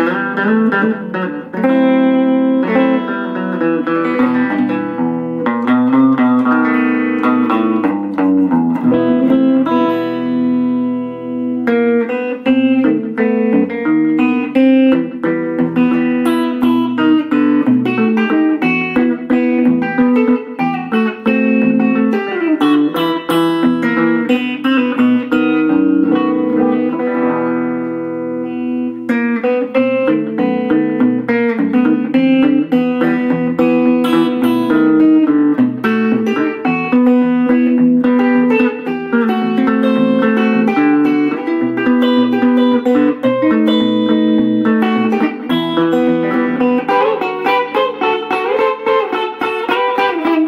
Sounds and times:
Acoustic guitar: 0.0s - 50.4s.

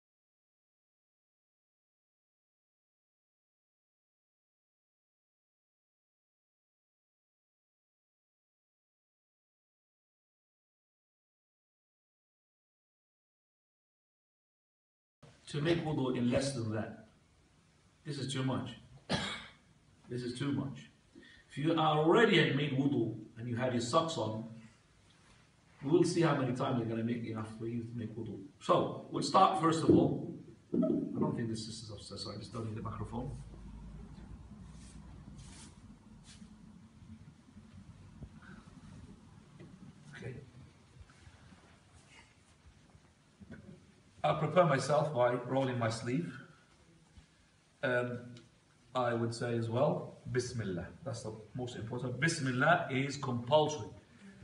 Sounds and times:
Speech: 15.5s - 17.1s, 18.0s - 18.9s, 20.1s - 24.6s, 25.8s - 30.3s, 31.1s - 33.5s, 40.1s - 40.5s, 44.2s - 46.5s, 47.8s - 54.0s.

